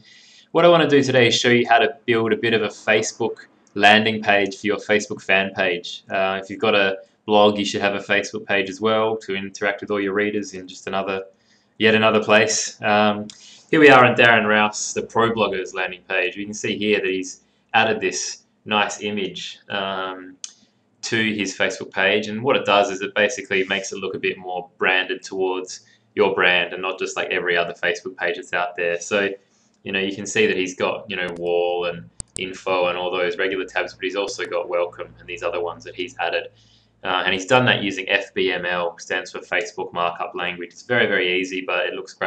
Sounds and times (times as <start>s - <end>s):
Speech: 0.0s - 42.2s.